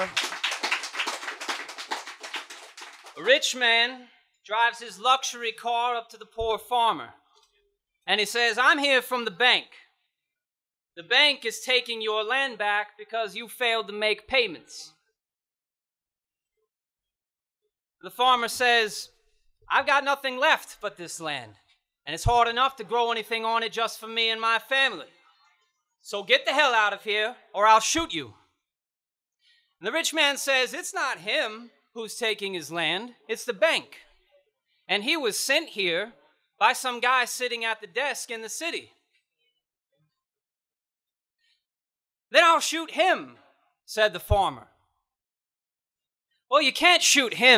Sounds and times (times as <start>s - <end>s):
Narration, monologue: 3.0s - 10.4s, 11.0s - 15.2s, 18.0s - 25.4s, 26.0s - 28.7s, 29.5s - 34.2s, 34.8s - 39.2s, 42.3s - 45.0s, 46.4s - 47.5s
Male speech, man speaking: 3.2s - 7.2s, 8.1s - 9.9s, 11.0s - 15.0s, 18.0s - 19.1s, 19.7s - 25.2s, 26.1s - 28.4s, 29.8s - 34.1s, 34.9s - 38.9s, 42.4s - 44.7s, 46.5s - 47.5s.